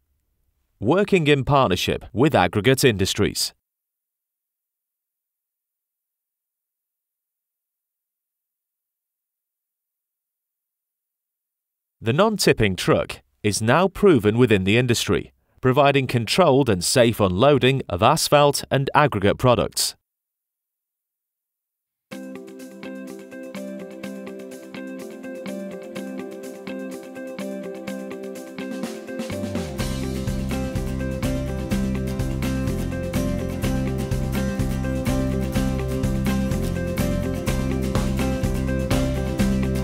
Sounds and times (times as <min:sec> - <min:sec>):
Music: 0:22.1 - 0:39.8.